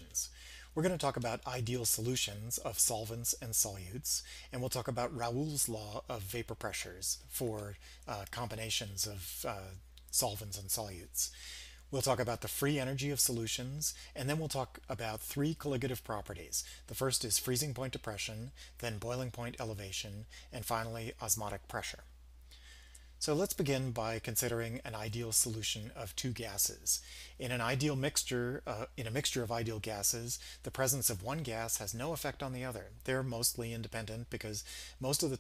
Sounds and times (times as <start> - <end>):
Speech: 0.0 - 22.1, 23.2 - 35.4.